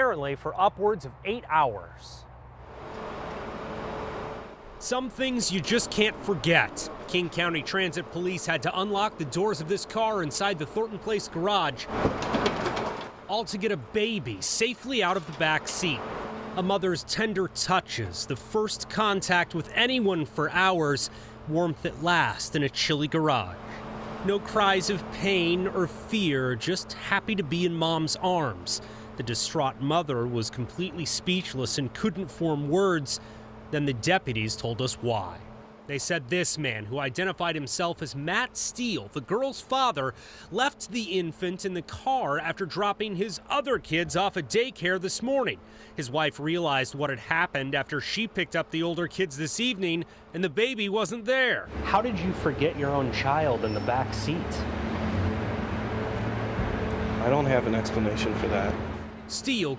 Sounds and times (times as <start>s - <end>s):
Speech: 0.0s - 2.2s, 4.8s - 11.9s, 13.3s - 16.0s, 16.6s - 23.6s, 24.2s - 54.6s, 57.2s - 59.7s.